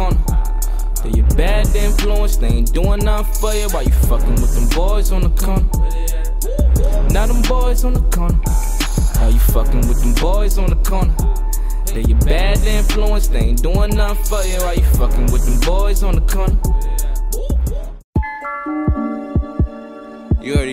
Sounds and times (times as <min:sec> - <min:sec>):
Music: 0:00.0 - 0:20.7
Speech: 0:20.4 - 0:20.7.